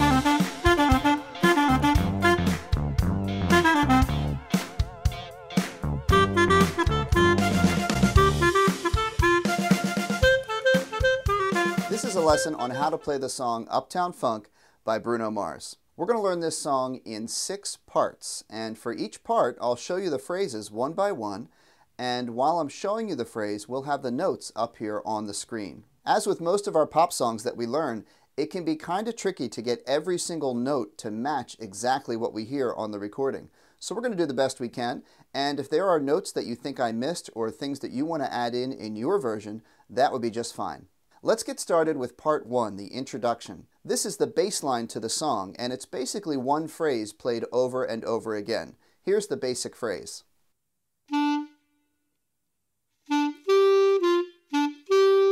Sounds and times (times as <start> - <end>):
Speech: 11.8 - 50.3.